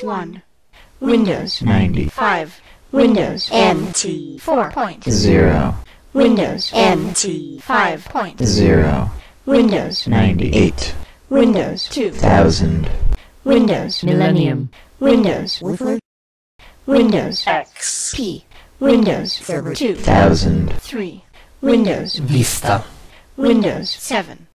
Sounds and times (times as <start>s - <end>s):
Speech: 0.0s - 0.4s, 1.0s - 16.0s, 16.9s - 24.5s.